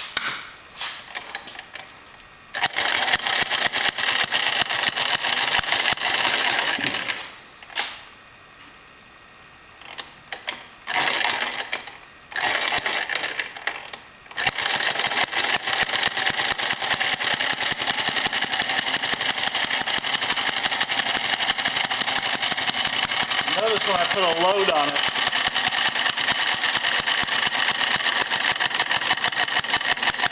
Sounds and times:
Engine starting: 2.6s - 7.3s, 9.8s - 30.3s.

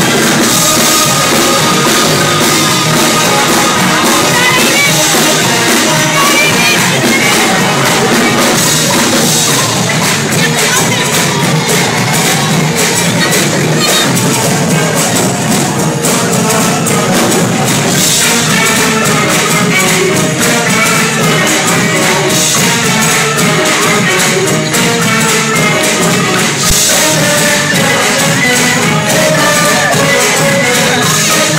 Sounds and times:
Tambourine: 0.0s - 31.5s.

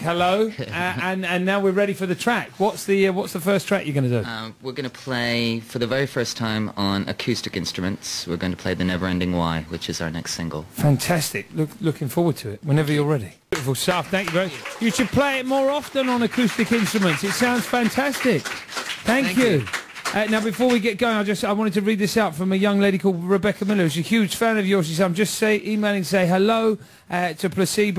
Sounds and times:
Speech: 0.0s - 18.4s, 19.1s - 27.9s.

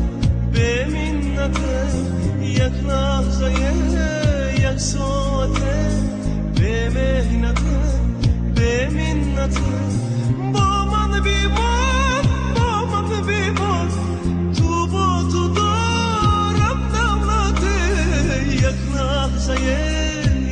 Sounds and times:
Song: 0.0s - 20.5s
Singing: 8.6s - 20.5s.

